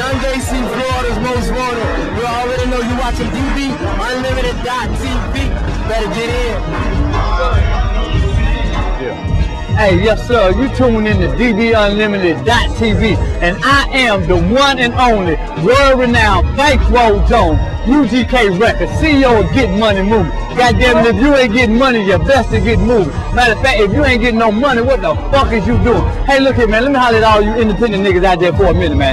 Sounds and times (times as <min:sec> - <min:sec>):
Speech: 0:00.0 - 0:06.7, 0:09.8 - 0:29.1
Music: 0:00.0 - 0:29.1.